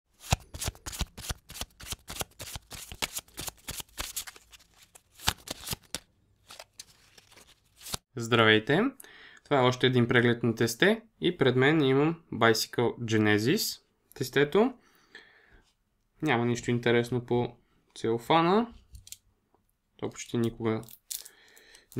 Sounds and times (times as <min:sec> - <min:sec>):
Shuffling cards: 0:00.2 - 0:08.0
Speech: 0:08.1 - 0:14.8, 0:16.2 - 0:18.8, 0:20.0 - 0:20.9.